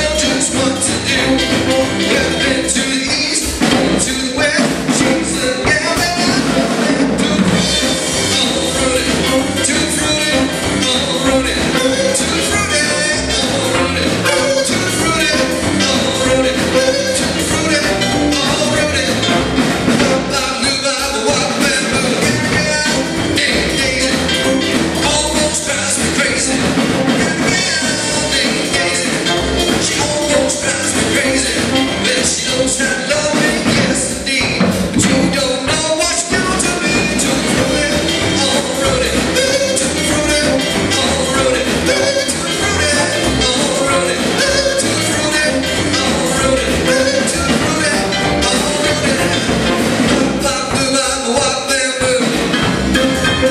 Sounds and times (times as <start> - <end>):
Country: 0.0 - 53.5.